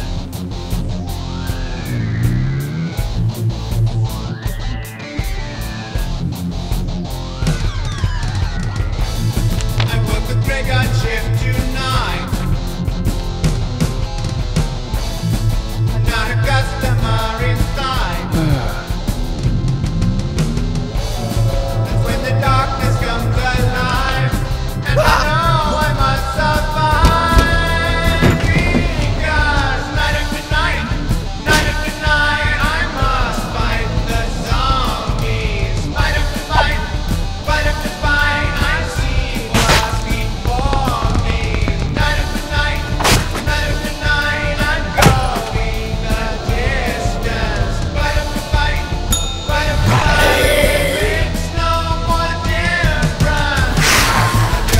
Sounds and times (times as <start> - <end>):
Music: 0.0 - 54.7.